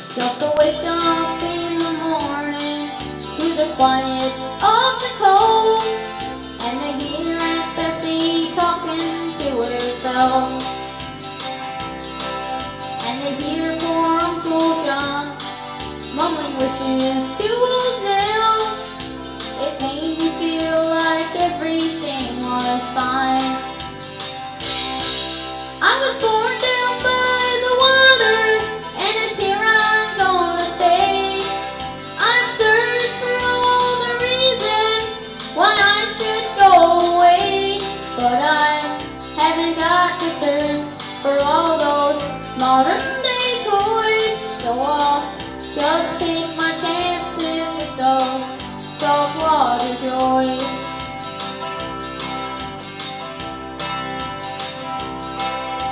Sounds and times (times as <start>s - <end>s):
Music: 0.0s - 55.9s
Child singing: 0.2s - 6.0s, 6.6s - 10.7s, 19.6s - 23.7s, 25.8s - 50.8s.